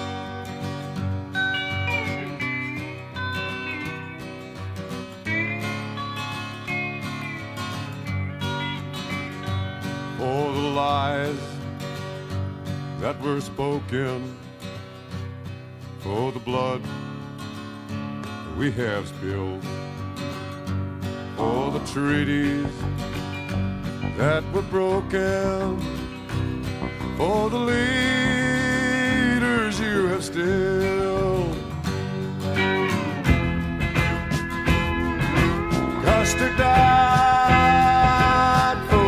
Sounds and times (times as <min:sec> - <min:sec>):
Music: 0:00.0 - 0:39.0.